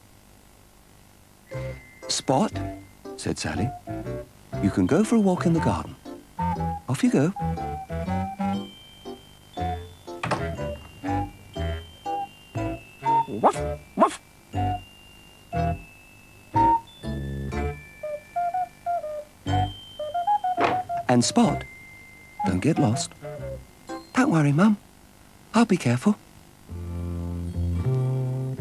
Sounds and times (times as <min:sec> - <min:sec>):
Music: 0:01.5 - 0:24.6, 0:26.7 - 0:28.6
Speech: 0:03.2 - 0:03.7, 0:04.6 - 0:06.0, 0:06.9 - 0:07.4, 0:21.1 - 0:21.6, 0:22.4 - 0:23.1, 0:24.2 - 0:24.8, 0:25.6 - 0:26.2.